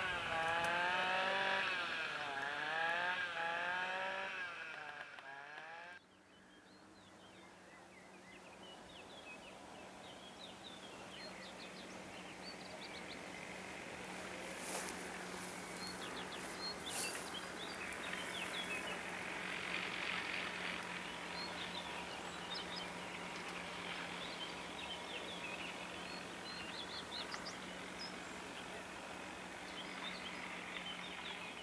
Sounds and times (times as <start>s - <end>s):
Outside, rural or natural: 0.0s - 31.6s.